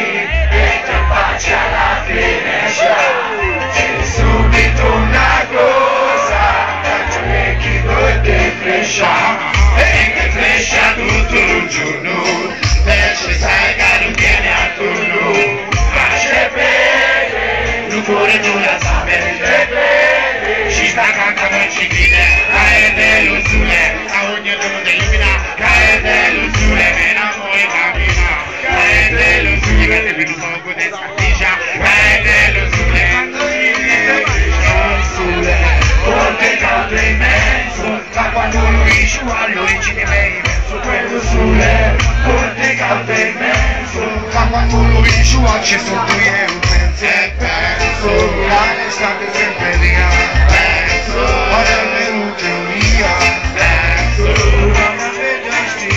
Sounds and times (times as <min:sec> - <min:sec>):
Hubbub, speech noise, speech babble: 0:00.0 - 0:55.9
Music: 0:00.0 - 0:55.9.